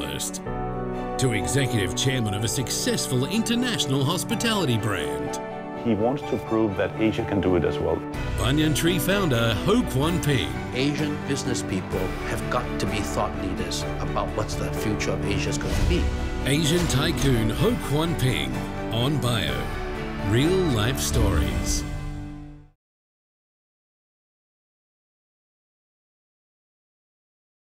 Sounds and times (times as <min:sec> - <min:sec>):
Speech: 0:00.0 - 0:00.4, 0:01.2 - 0:21.8
Music: 0:00.0 - 0:22.8.